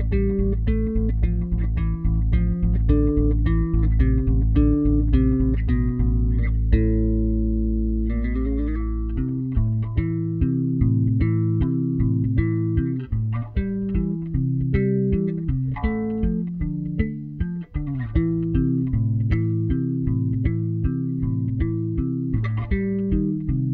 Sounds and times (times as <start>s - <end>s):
Electric guitar: 0.0s - 23.7s
Strum: 0.0s - 23.7s.